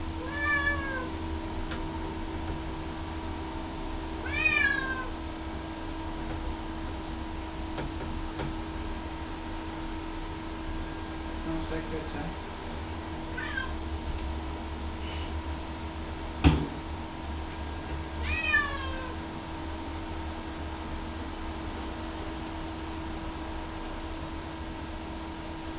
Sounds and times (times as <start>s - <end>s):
Meow: 0.2s - 1.1s, 4.2s - 5.2s, 13.4s - 13.8s, 18.2s - 19.2s
Speech: 11.4s - 12.4s.